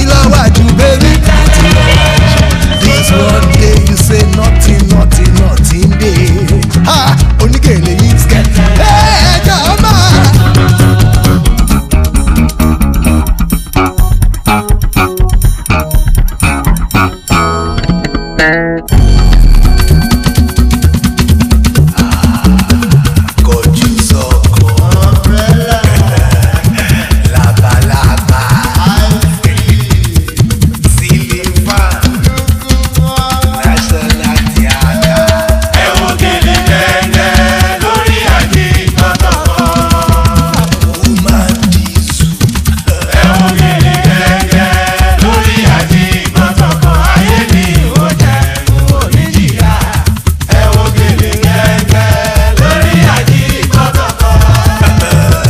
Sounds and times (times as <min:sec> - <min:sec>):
Afrobeat: 0:00.0 - 0:55.4.